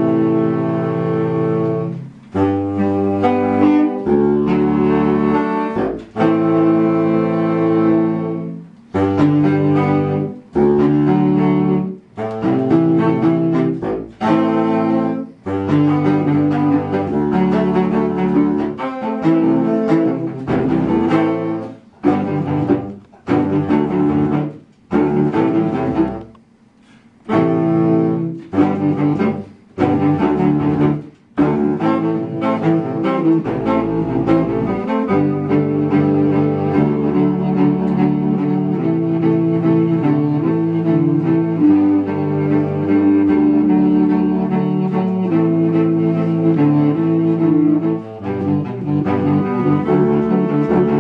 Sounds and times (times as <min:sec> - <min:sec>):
Music: 0:00.0 - 0:51.0.